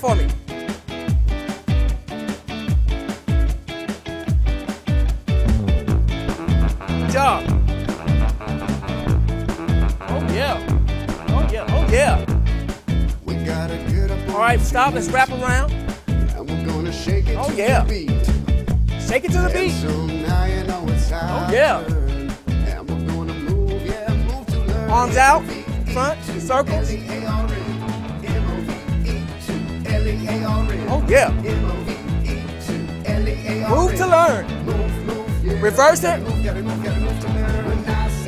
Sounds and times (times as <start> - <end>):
Speech: 0.0 - 0.4, 7.1 - 7.5, 10.1 - 10.6, 11.3 - 12.3, 13.3 - 15.7, 16.4 - 18.2, 19.0 - 22.0, 24.8 - 26.9, 30.8 - 31.4, 33.6 - 34.5, 35.5 - 36.3
Music: 0.0 - 38.2.